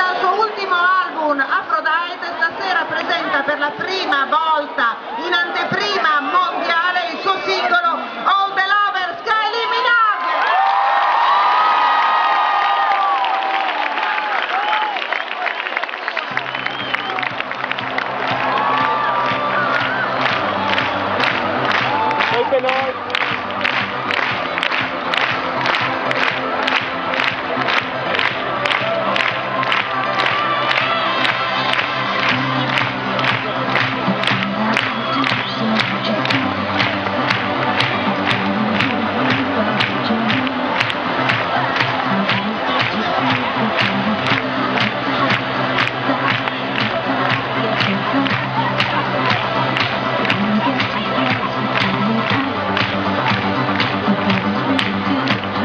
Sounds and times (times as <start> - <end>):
Middle Eastern music: 16.4 - 55.6.